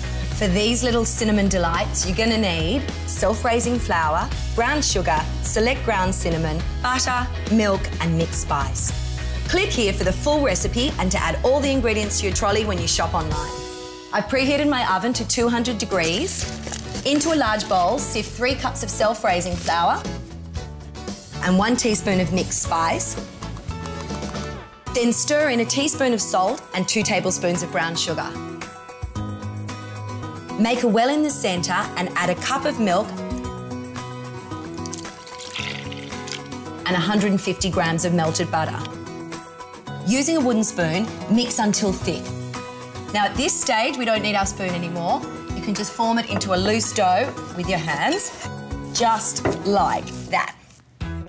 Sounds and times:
Music: 0:00.0 - 0:51.2
Speech: 0:09.5 - 0:13.6, 0:14.2 - 0:16.4, 0:17.1 - 0:20.1, 0:21.4 - 0:23.2, 0:25.0 - 0:28.4, 0:30.6 - 0:33.1, 0:36.9 - 0:38.9, 0:40.1 - 0:42.3, 0:43.1 - 0:48.4, 0:49.0 - 0:50.6.

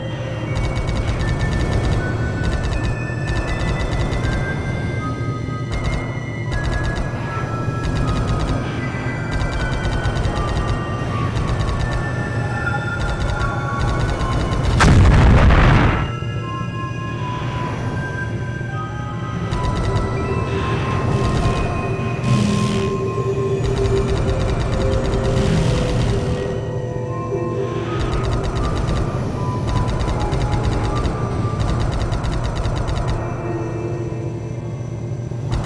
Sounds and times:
Scary music: 0:00.0 - 0:35.6.

